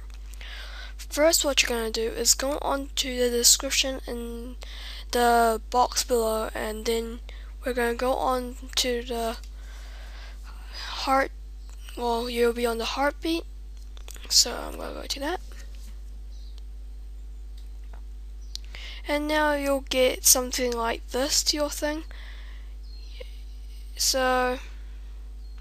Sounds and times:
Speech: 1.0s - 9.4s, 10.9s - 11.3s, 11.9s - 13.4s, 14.2s - 15.5s, 19.0s - 22.1s, 24.0s - 24.7s.

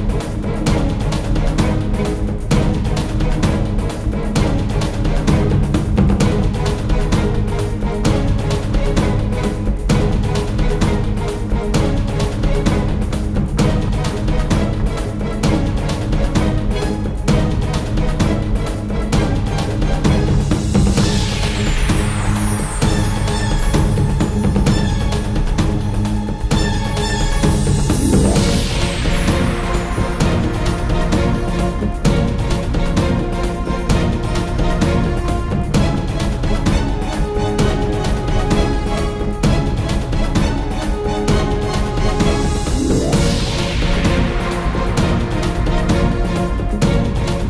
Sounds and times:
Music: 0.0s - 47.5s.

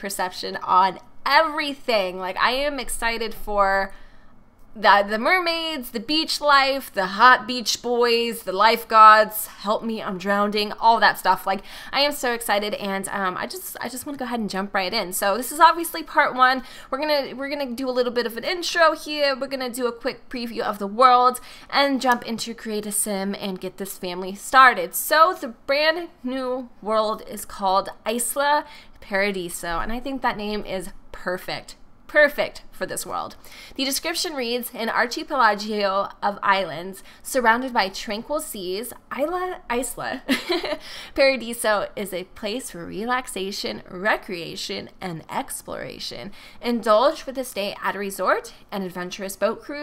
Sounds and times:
Speech: 0.0s - 3.9s, 4.8s - 40.3s, 41.2s - 49.8s.

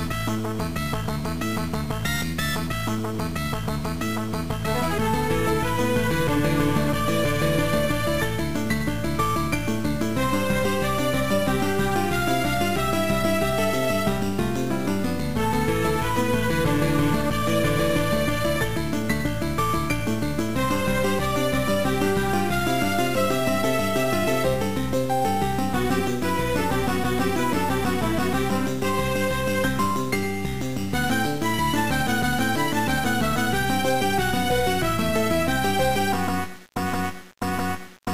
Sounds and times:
Theme music: 4.7s - 30.2s, 30.9s - 36.2s.

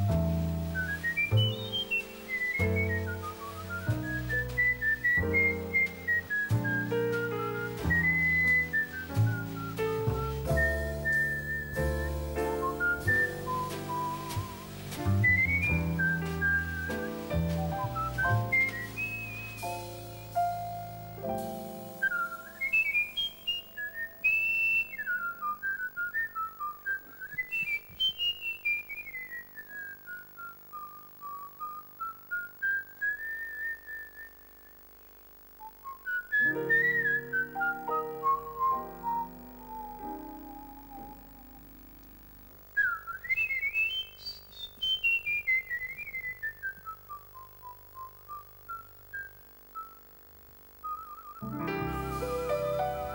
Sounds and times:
Piano: 0.0s - 24.3s, 36.4s - 42.4s, 51.4s - 53.1s.

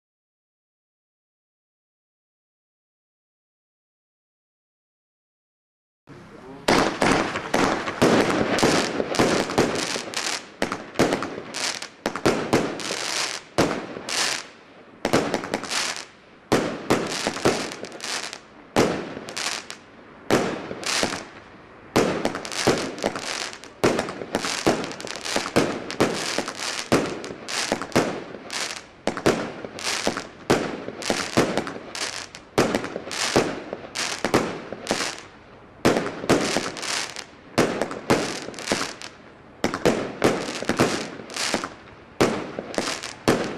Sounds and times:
Speech: 6.1s - 6.8s
Fireworks: 6.5s - 43.5s.

